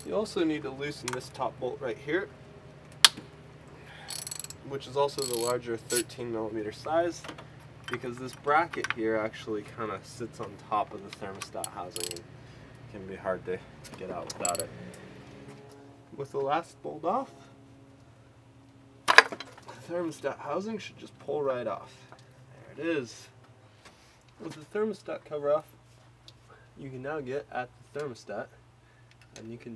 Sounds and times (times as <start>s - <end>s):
Outside, urban or manmade: 0.0s - 29.7s
Speech: 0.1s - 2.3s, 4.6s - 7.3s, 7.9s - 12.2s, 12.9s - 14.7s, 16.2s - 17.4s, 19.8s - 23.3s, 24.4s - 25.7s, 26.8s - 28.6s, 29.4s - 29.7s.